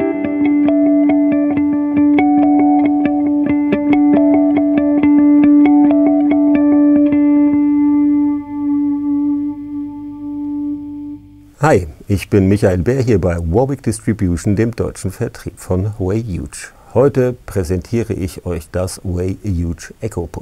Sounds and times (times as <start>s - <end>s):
Music: 0.0s - 11.5s.